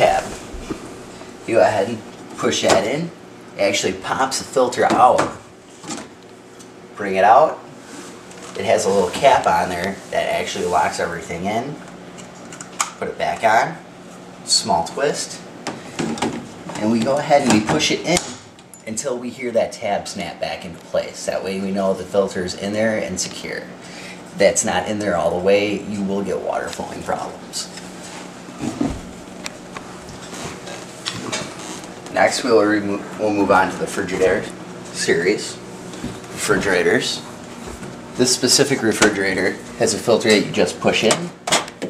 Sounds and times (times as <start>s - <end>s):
Speech: 0.0s - 0.4s, 1.5s - 5.4s, 7.0s - 7.6s, 8.6s - 11.8s, 13.0s - 13.8s, 14.4s - 15.5s, 16.7s - 23.7s, 24.4s - 27.8s, 32.1s - 35.6s, 36.4s - 37.3s, 38.2s - 41.4s.